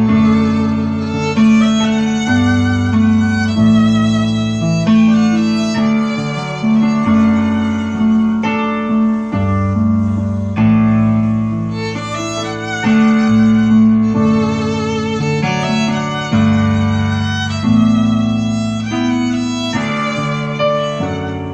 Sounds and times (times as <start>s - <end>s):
Violin, fiddle: 0.0s - 21.5s.